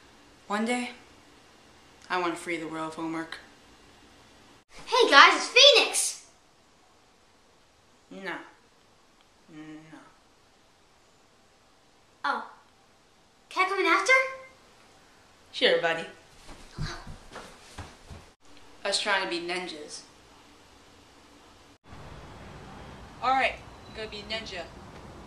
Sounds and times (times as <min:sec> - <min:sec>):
Child speech, kid speaking: 0:04.8 - 0:06.3, 0:12.2 - 0:12.6, 0:13.5 - 0:14.6, 0:16.7 - 0:17.2, 0:18.9 - 0:20.1.